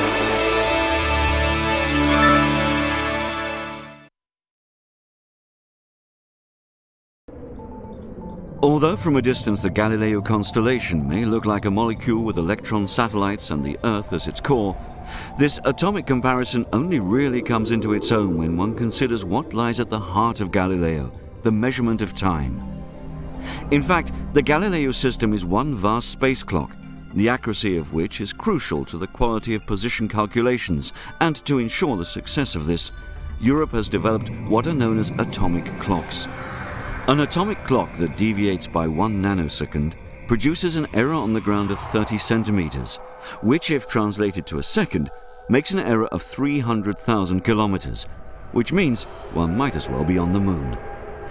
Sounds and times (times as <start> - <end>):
Music: 0.0 - 4.1, 18.9 - 49.4
Speech: 8.6 - 14.8, 15.4 - 22.6, 23.7 - 36.3, 37.1 - 50.8.